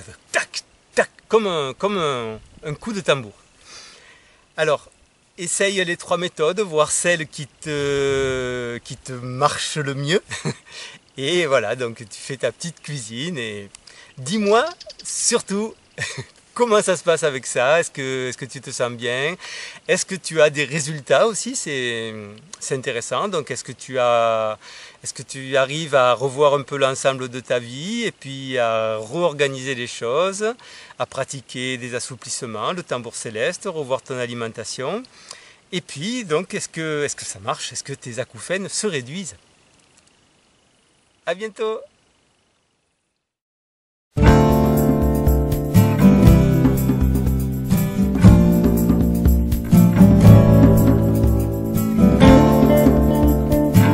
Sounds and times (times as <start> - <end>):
Music: 44.2 - 53.9.